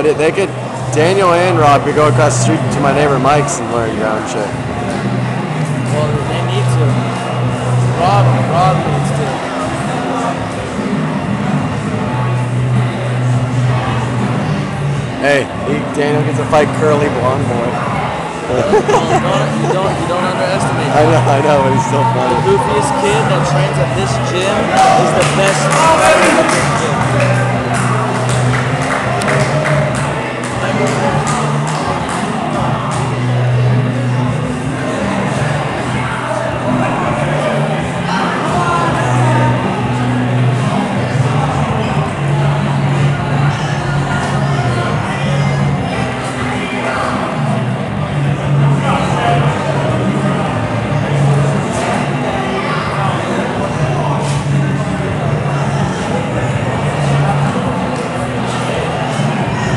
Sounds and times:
Inside, large room or hall: 0.0s - 59.7s.

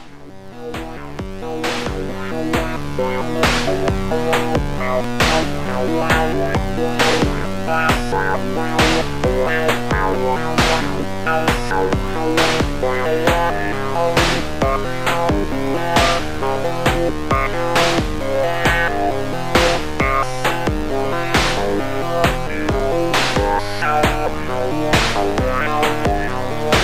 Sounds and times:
Progressive rock: 0.0s - 26.8s
Sampler: 0.0s - 26.8s.

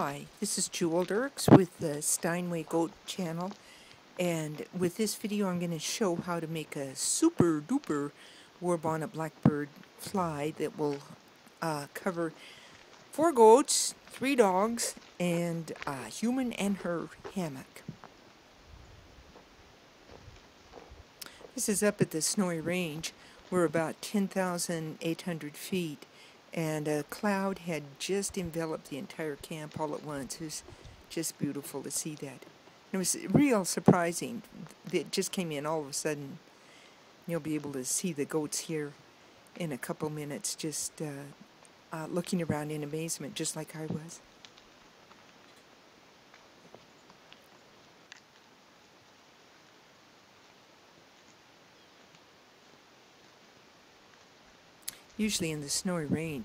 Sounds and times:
Speech: 0.0s - 3.6s, 4.2s - 12.4s, 13.1s - 17.9s, 21.6s - 36.4s, 37.3s - 39.0s, 39.6s - 41.4s, 42.0s - 44.2s, 54.9s - 56.4s.

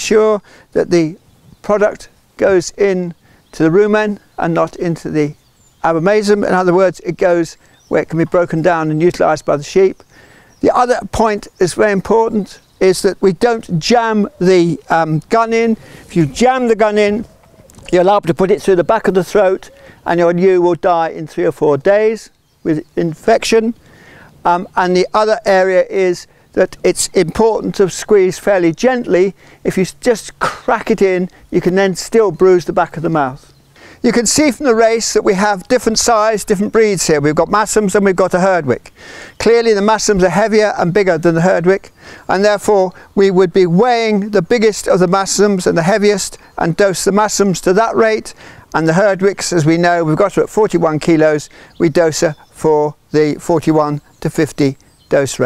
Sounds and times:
Speech: 0.0s - 10.0s, 10.6s - 23.8s, 24.4s - 55.4s.

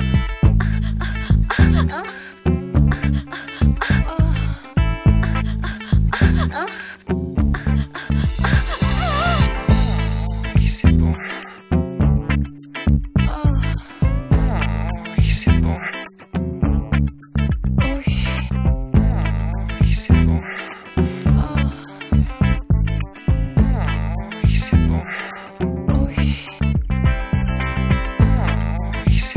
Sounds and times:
Music: 0.0s - 29.3s.

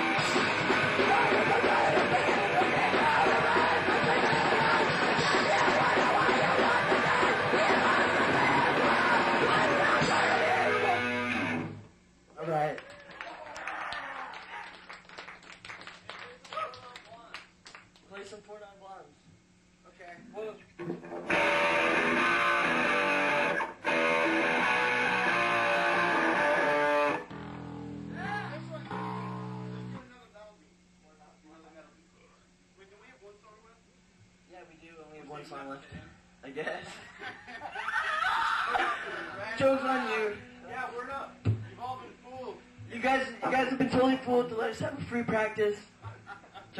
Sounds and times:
Screaming: 37.8s - 38.9s
Speech: 39.4s - 45.9s.

